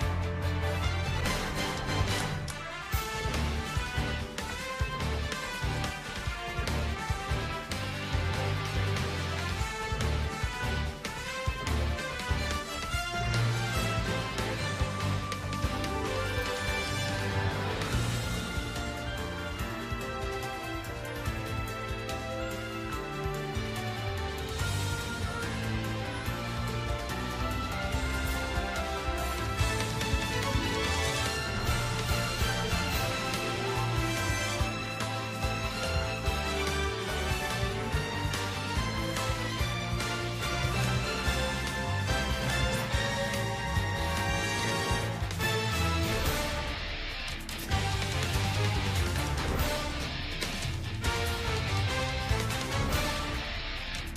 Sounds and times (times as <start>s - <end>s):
Music: 0.0s - 54.1s.